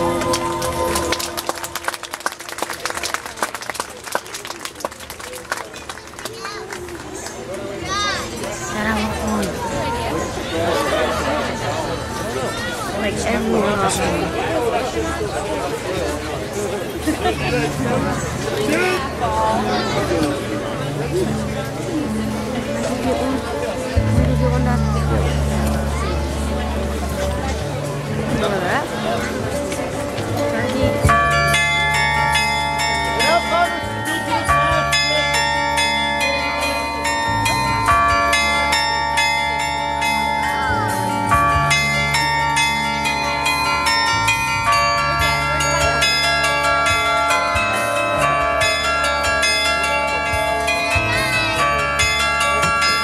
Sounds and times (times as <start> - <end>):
Speech: 5.0 - 31.2.